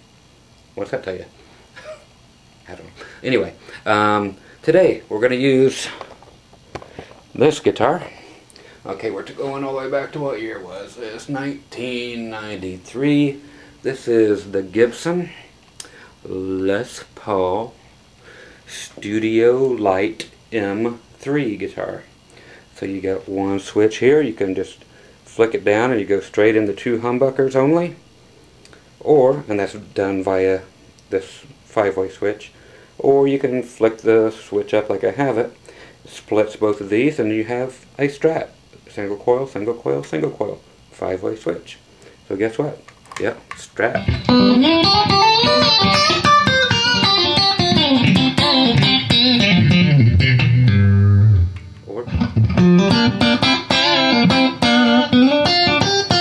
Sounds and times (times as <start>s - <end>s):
Speech: 0.8s - 1.4s, 2.6s - 6.0s, 7.4s - 8.2s, 8.8s - 15.5s, 16.2s - 17.8s, 18.7s - 22.1s, 22.8s - 28.0s, 29.0s - 44.1s, 51.9s - 52.2s.